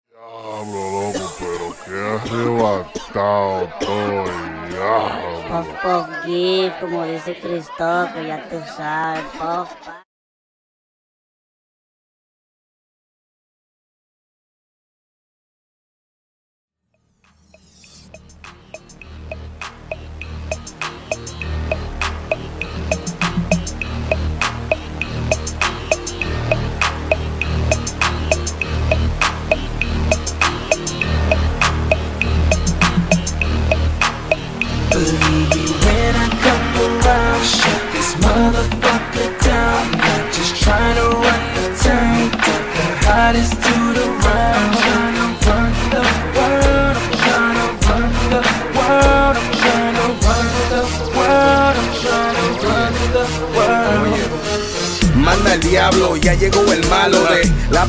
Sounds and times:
Music: 0:17.0 - 0:57.8.

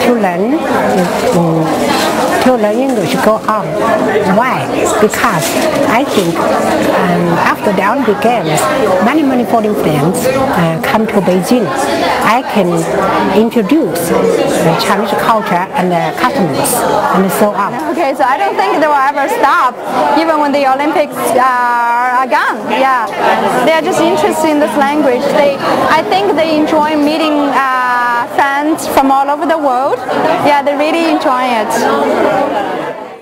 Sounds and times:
Female speech, woman speaking: 0:00.0 - 0:32.0.

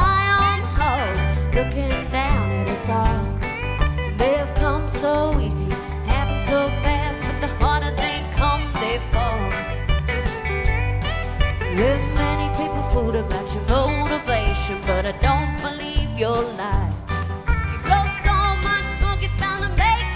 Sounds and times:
Music: 0:00.0 - 0:20.1.

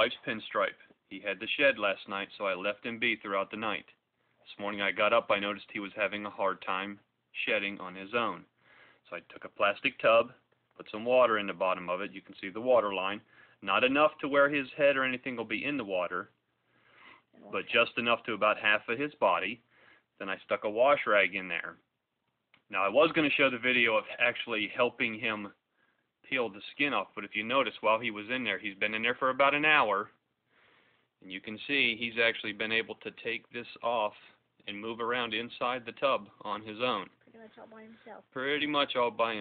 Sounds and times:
Speech: 0:00.0 - 0:08.5, 0:09.1 - 0:16.4, 0:17.4 - 0:21.8, 0:22.7 - 0:25.6, 0:26.3 - 0:30.2, 0:31.2 - 0:39.4
Inside, small room: 0:00.0 - 0:39.4.

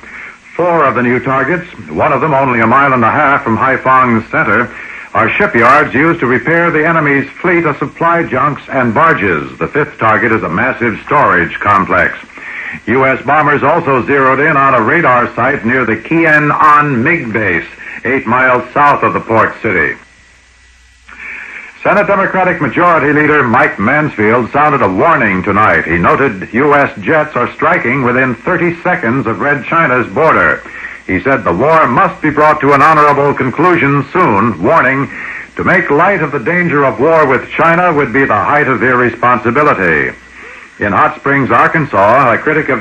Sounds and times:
Radio: 0:00.0 - 0:42.8
Speech: 0:00.5 - 0:20.0, 0:21.8 - 0:42.8.

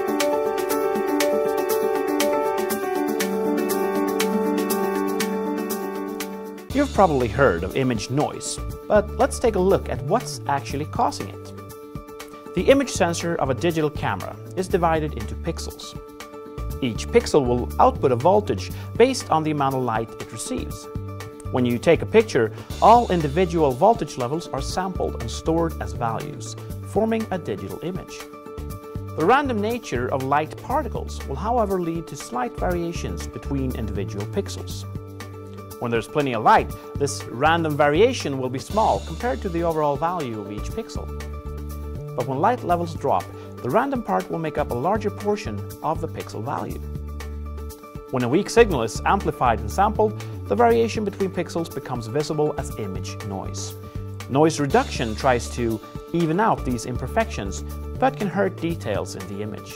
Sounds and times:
Music: 0:00.0 - 0:59.7
Speech: 0:06.7 - 0:11.6, 0:12.6 - 0:16.0, 0:16.8 - 0:20.9, 0:21.5 - 0:28.2, 0:29.2 - 0:34.9, 0:35.8 - 0:41.1, 0:42.2 - 0:46.8, 0:48.1 - 0:59.7.

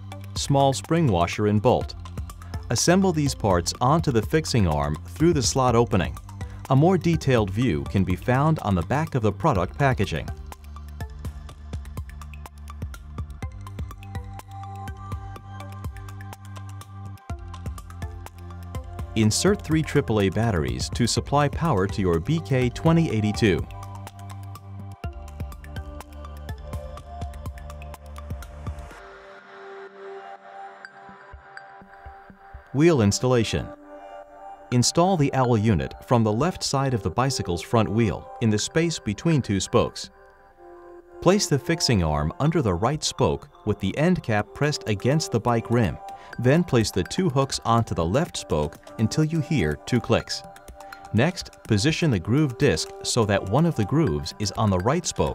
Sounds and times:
Music: 0:00.0 - 0:55.3
Speech: 0:00.4 - 0:01.9, 0:02.7 - 0:10.3, 0:19.2 - 0:23.7, 0:32.8 - 0:33.8, 0:34.7 - 0:40.1, 0:41.2 - 0:50.4, 0:51.1 - 0:55.3.

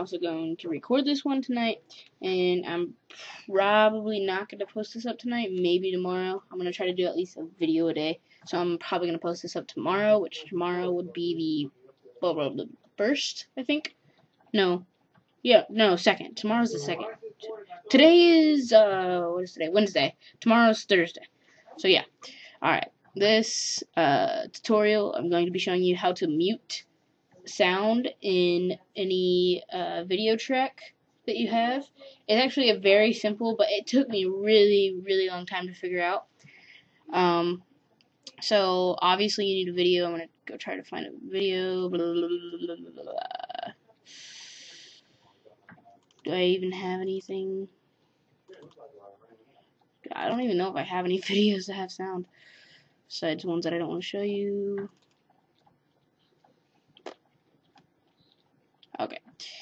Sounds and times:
Speech: 0:00.0 - 0:13.9, 0:14.6 - 0:14.8, 0:15.5 - 0:26.8, 0:27.4 - 0:36.3, 0:37.1 - 0:37.6, 0:38.3 - 0:44.4, 0:45.6 - 0:47.7, 0:48.5 - 0:52.3, 0:53.1 - 0:54.9, 0:59.0 - 0:59.6.

